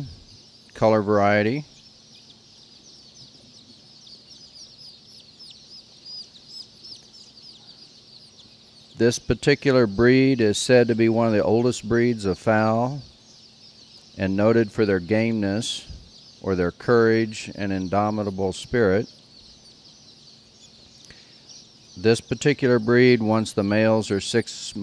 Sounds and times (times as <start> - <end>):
Speech: 0.8 - 1.7, 9.0 - 13.1, 14.2 - 19.1, 22.0 - 24.8.